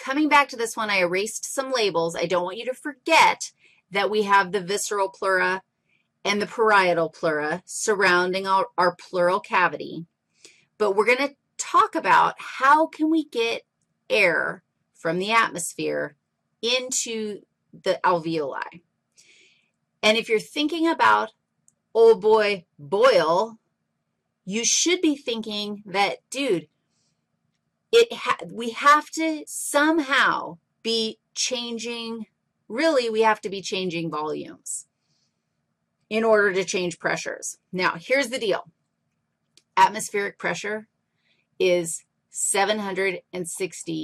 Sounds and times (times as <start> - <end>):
Speech: 0.0 - 5.6, 6.3 - 10.0, 10.8 - 18.8, 20.0 - 21.3, 22.0 - 23.6, 24.5 - 26.6, 28.0 - 34.8, 36.1 - 38.6, 39.8 - 40.8, 41.6 - 44.0.